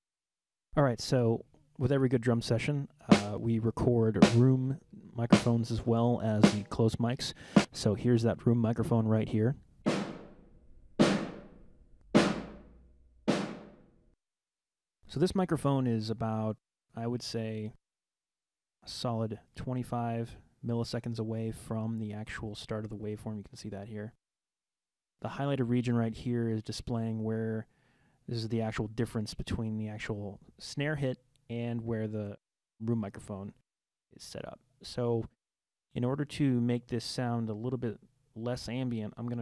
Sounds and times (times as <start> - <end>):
Speech: 0.7 - 9.6, 15.1 - 17.8, 18.8 - 24.2, 25.2 - 27.7, 28.3 - 33.6, 34.2 - 35.4, 36.0 - 39.4.